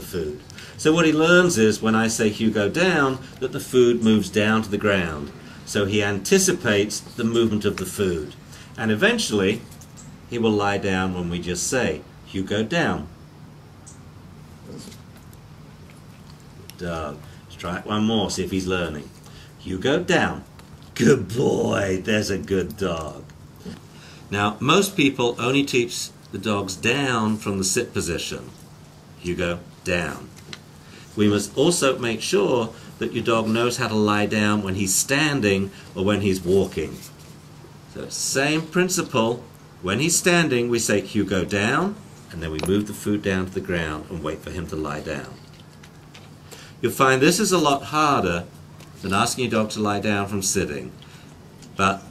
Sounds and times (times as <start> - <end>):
Speech: 0.0 - 9.7, 10.3 - 13.1, 16.7 - 23.3, 24.3 - 28.6, 29.2 - 30.4, 31.2 - 37.1, 37.9 - 45.5, 46.8 - 51.0, 51.8 - 52.1.